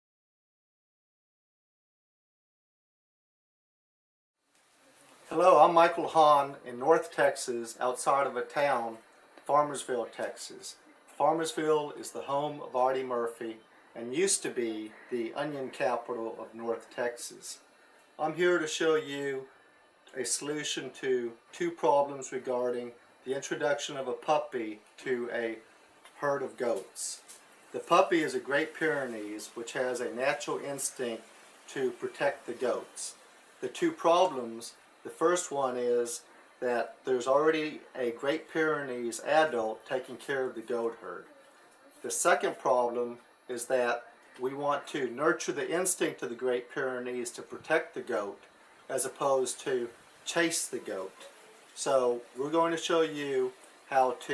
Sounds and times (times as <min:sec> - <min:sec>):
Speech: 0:05.3 - 0:19.5, 0:20.1 - 0:54.3.